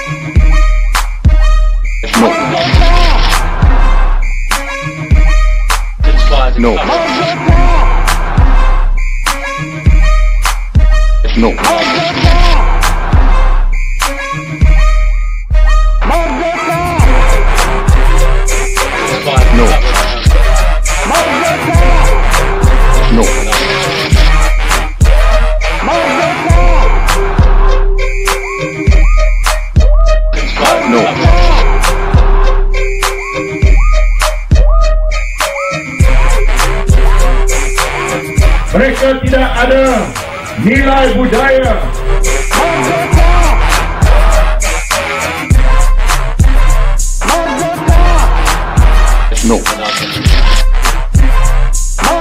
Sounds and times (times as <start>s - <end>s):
Music: 0.0s - 52.2s
Speech: 6.0s - 7.4s, 11.2s - 12.1s, 19.2s - 20.2s, 38.7s - 41.9s, 49.3s - 50.0s.